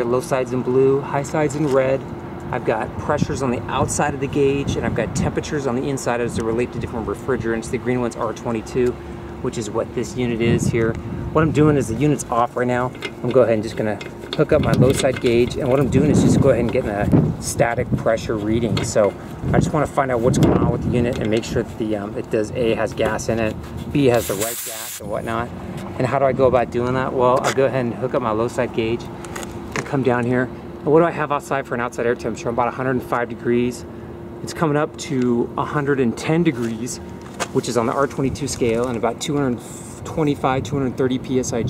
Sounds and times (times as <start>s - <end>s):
Speech: 0.0s - 29.1s, 29.8s - 41.7s.